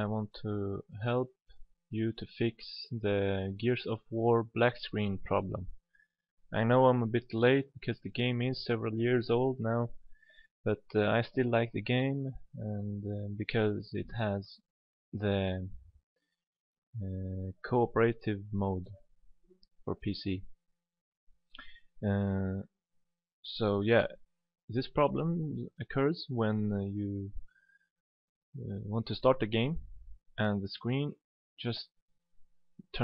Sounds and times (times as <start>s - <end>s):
Speech: 0.0s - 5.8s, 6.5s - 10.0s, 10.7s - 14.6s, 15.2s - 15.8s, 17.0s - 19.0s, 19.9s - 20.5s, 22.0s - 22.7s, 23.5s - 27.4s, 28.6s - 32.0s, 32.8s - 33.0s.